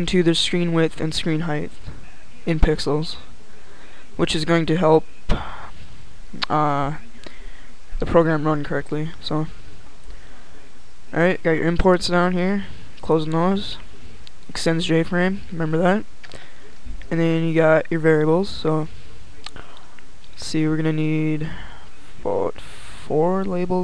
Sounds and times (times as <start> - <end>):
Speech: 0.0 - 5.7, 6.4 - 9.6, 10.6 - 16.1, 16.8 - 19.8, 20.4 - 23.8.